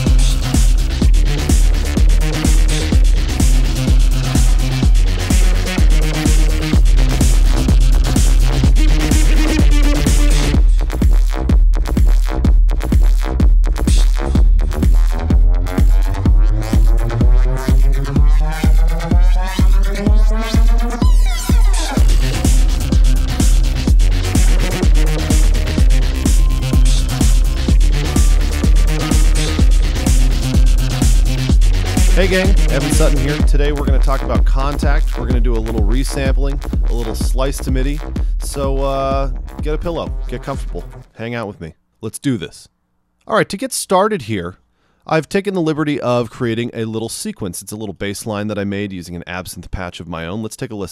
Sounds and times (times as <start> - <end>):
Music: 0.0 - 41.1.